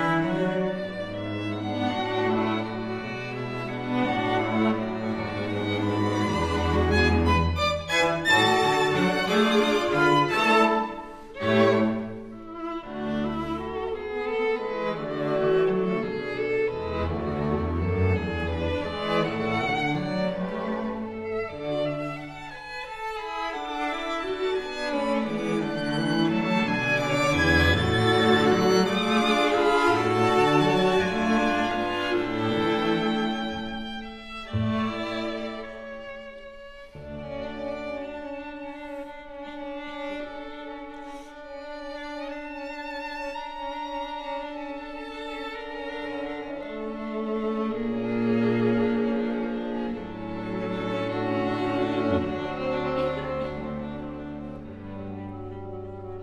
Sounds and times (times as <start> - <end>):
Cello: 0.0 - 56.2
Violin, fiddle: 0.0 - 56.2.